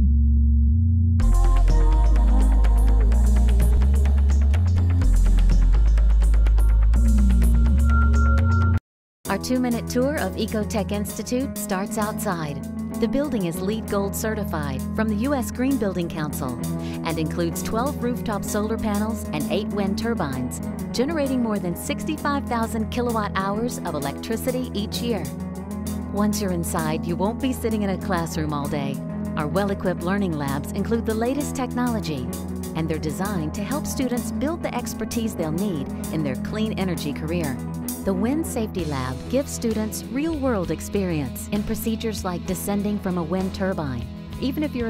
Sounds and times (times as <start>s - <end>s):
Music: 0.0s - 44.8s
Speech: 9.3s - 25.3s, 26.1s - 44.8s.